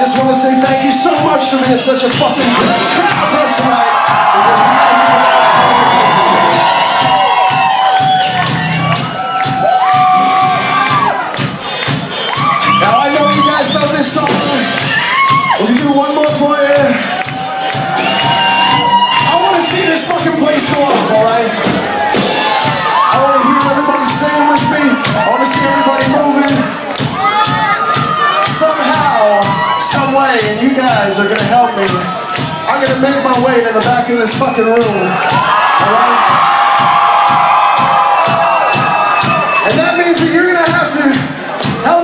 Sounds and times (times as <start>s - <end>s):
Speech: 0.0s - 3.8s, 4.4s - 6.0s, 12.8s - 14.7s, 15.6s - 17.0s, 19.3s - 21.6s, 23.1s - 26.7s, 28.5s - 32.1s, 32.7s - 35.2s, 39.7s - 42.0s
Crowd: 0.0s - 42.0s
Music: 0.0s - 42.0s.